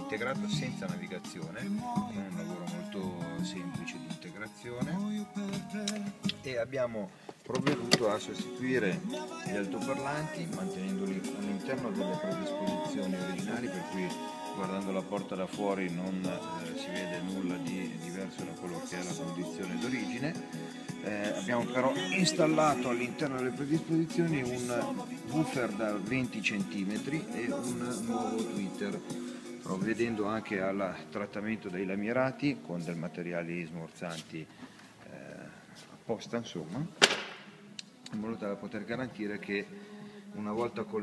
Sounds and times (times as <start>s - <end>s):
Speech: 0.0s - 5.1s, 6.4s - 20.4s, 21.0s - 29.0s, 29.7s - 37.0s, 38.1s - 39.7s, 40.4s - 41.0s
Music: 0.0s - 41.0s.